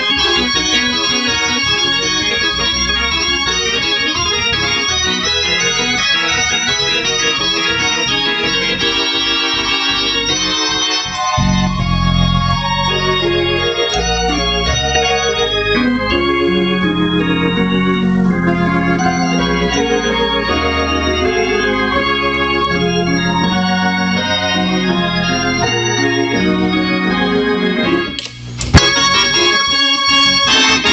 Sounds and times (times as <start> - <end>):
Hammond organ: 0.0 - 30.9.